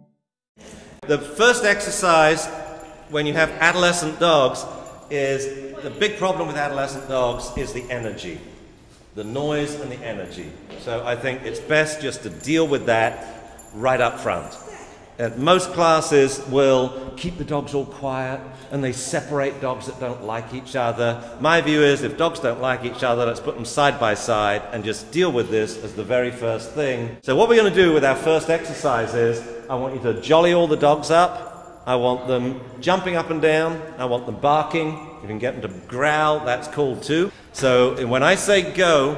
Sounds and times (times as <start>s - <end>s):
Speech: 1.0s - 8.4s, 9.2s - 39.1s.